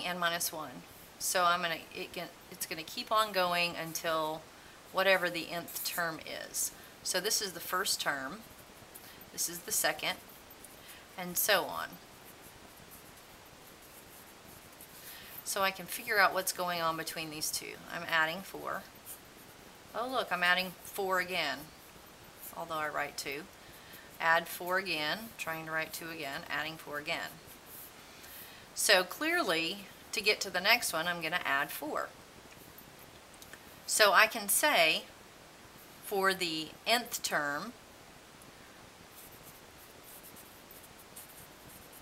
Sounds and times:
Speech: 0:00.0 - 0:04.4, 0:05.0 - 0:08.4, 0:09.4 - 0:10.2, 0:11.2 - 0:12.0, 0:15.5 - 0:18.9, 0:19.9 - 0:21.7, 0:22.5 - 0:23.5, 0:24.2 - 0:27.4, 0:28.8 - 0:32.1, 0:33.9 - 0:35.1, 0:36.1 - 0:37.8
Writing: 0:05.0 - 0:28.0, 0:39.1 - 0:42.0.

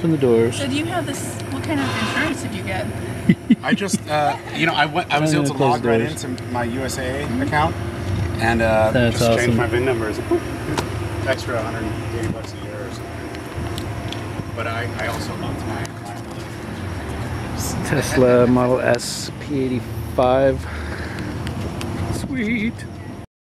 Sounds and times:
Vehicle: 0:00.0 - 0:23.3.

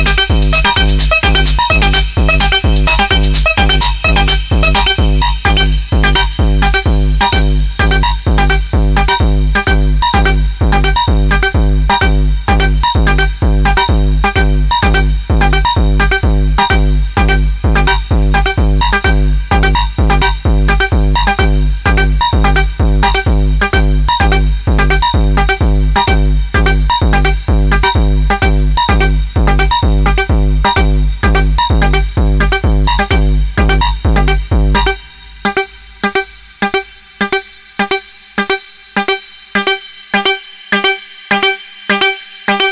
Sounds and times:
Hip hop music: 0:00.0 - 0:42.7.

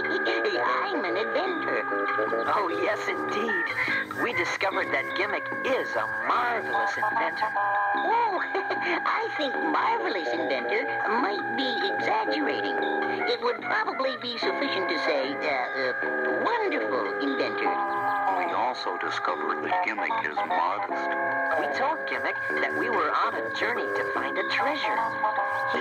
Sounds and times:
Speech: 0:00.0 - 0:25.1
Music: 0:00.0 - 0:25.8.

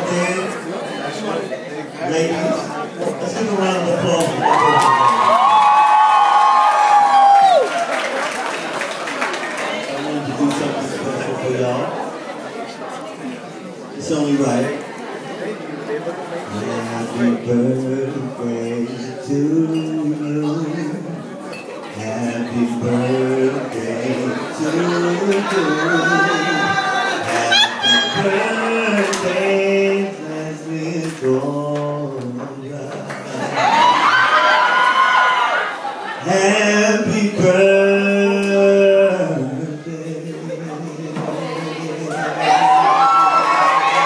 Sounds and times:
Male singing: 0:16.5 - 0:21.2, 0:22.0 - 0:33.9, 0:36.2 - 0:43.0.

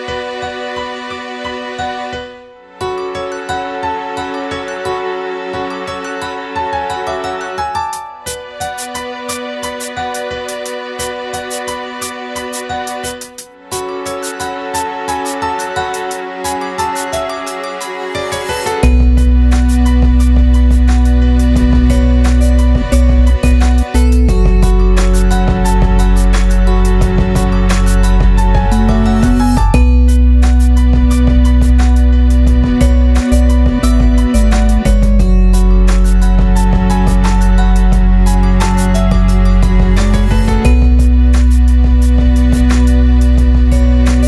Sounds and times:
Background music: 0:00.0 - 0:44.2.

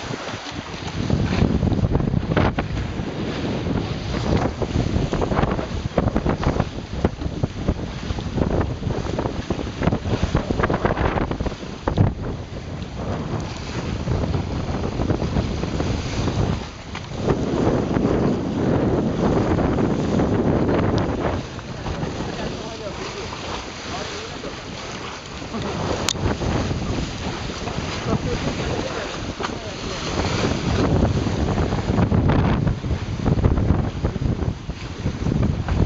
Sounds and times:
Sailboat, sailing ship: 0:00.0 - 0:35.8
Waves, surf: 0:00.0 - 0:35.8
Wind noise (microphone): 0:00.0 - 0:35.8.

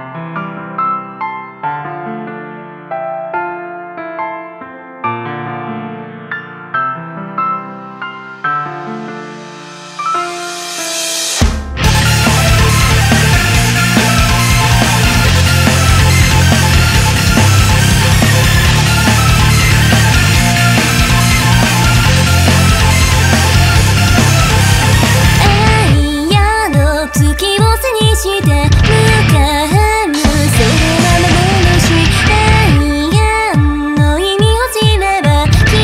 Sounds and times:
Background music: 0:06.7 - 0:35.8
Rhythm and blues: 0:08.4 - 0:35.8
Blues: 0:10.1 - 0:35.8.

